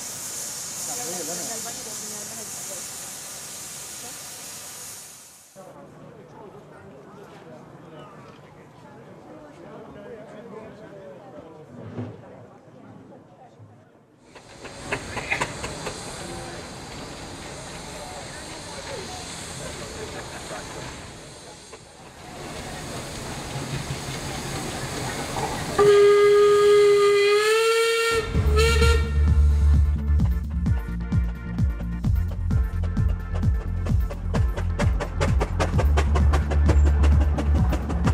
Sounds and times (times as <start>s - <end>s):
Hiss: 0.0s - 5.6s, 14.3s - 28.2s.